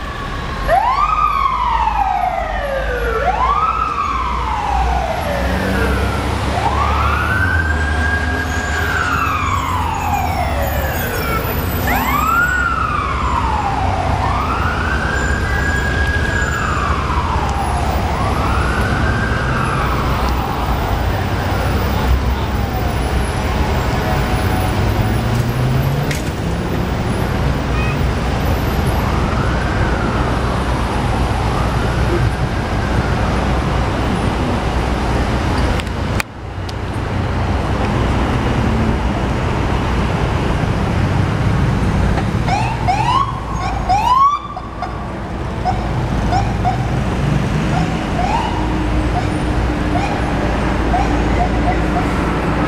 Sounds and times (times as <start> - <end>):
Vehicle: 0.0 - 52.6.